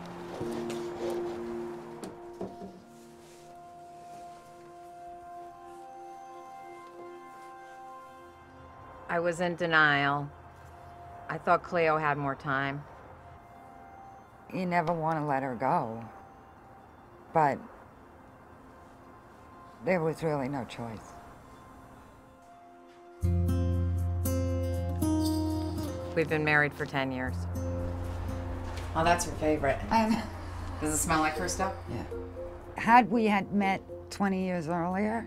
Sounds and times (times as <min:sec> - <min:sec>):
Music: 0:00.0 - 0:11.4, 0:18.2 - 0:35.2.